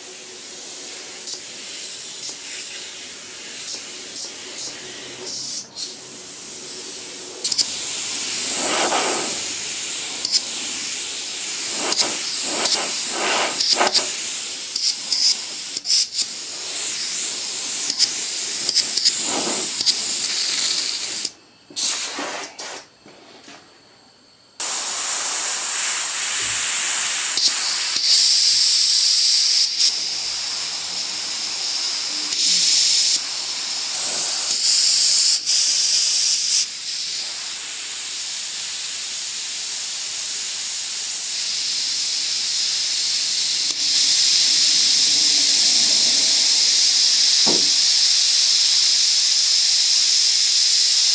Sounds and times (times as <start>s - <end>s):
Spray: 0.0s - 22.9s, 24.6s - 51.1s
Inside, small room: 0.0s - 51.1s.